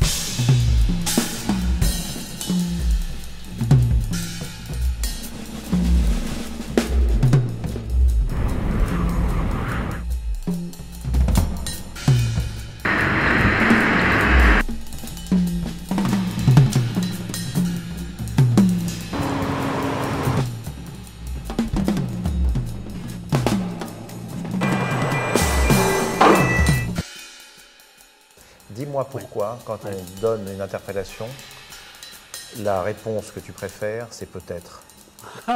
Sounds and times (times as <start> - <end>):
Music: 0.0 - 35.5
Ping: 24.7 - 27.0.